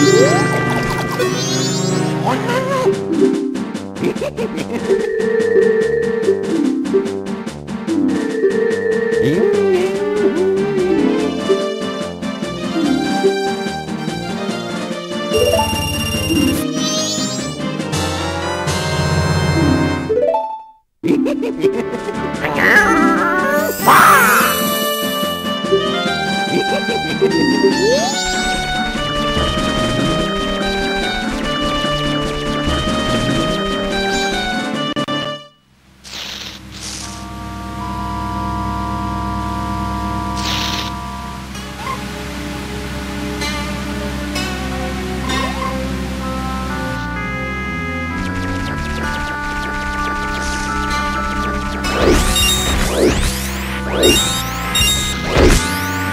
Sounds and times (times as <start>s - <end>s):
Music: 0.0s - 35.7s, 36.6s - 56.1s
Smash, crash: 51.9s - 56.1s.